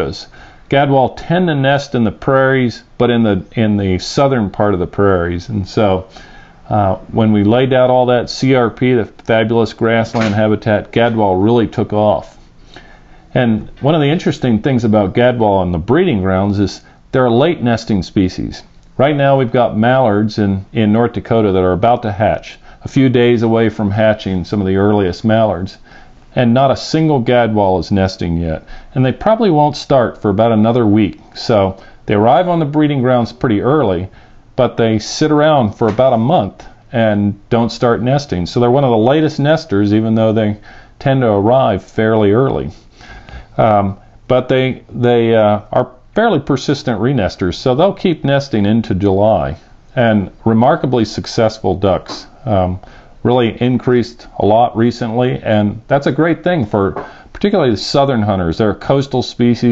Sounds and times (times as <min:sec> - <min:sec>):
Speech: 0:00.0 - 0:12.4, 0:13.3 - 0:42.8, 0:43.6 - 0:59.7.